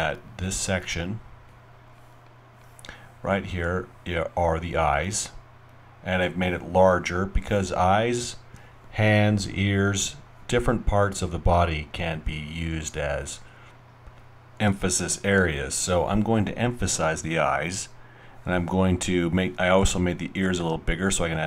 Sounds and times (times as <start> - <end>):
Speech: 0.0 - 1.3, 3.2 - 5.4, 6.0 - 13.5, 14.6 - 21.4.